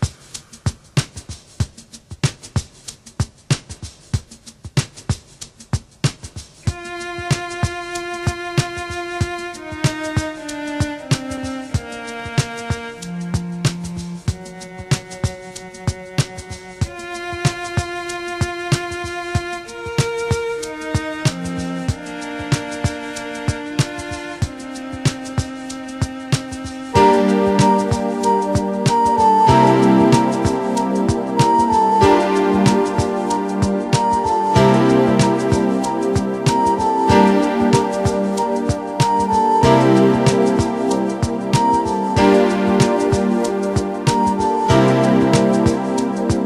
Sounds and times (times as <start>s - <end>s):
Music: 0.0s - 46.4s.